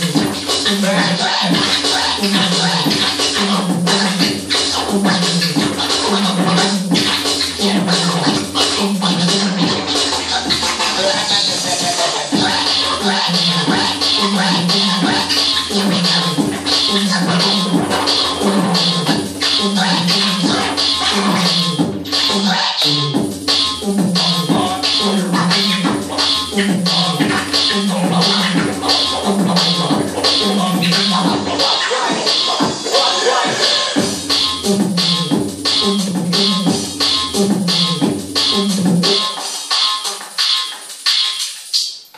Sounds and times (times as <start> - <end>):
Electronic music: 0.0 - 42.1
Scratching (performance technique): 0.0 - 42.1.